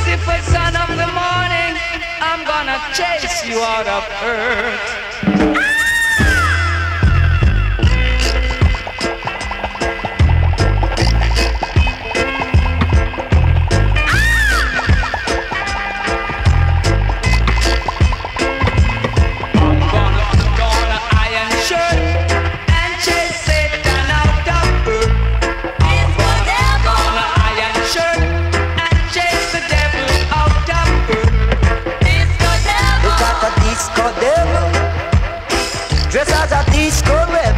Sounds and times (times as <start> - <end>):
Funk: 4.5 - 37.5.